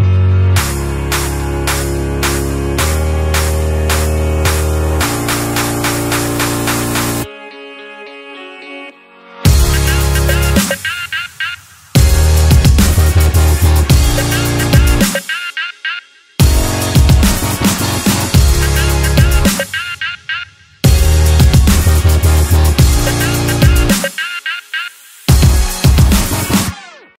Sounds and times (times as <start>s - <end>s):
Music: 0.0s - 27.1s.